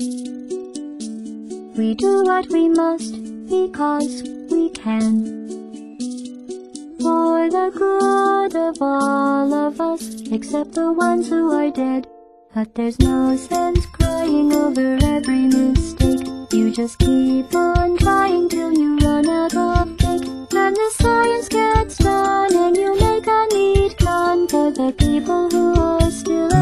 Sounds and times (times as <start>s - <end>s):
Music: 0.0s - 26.6s.